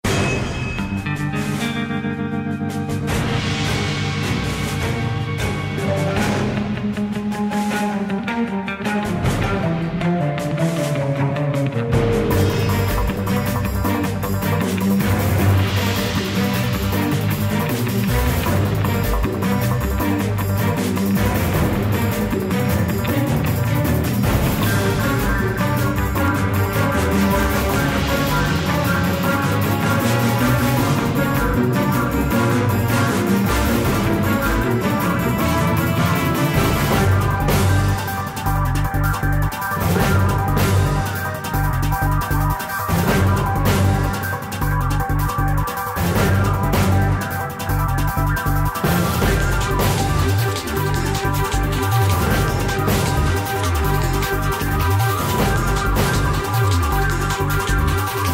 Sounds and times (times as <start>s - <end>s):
Music: 0.0s - 58.3s.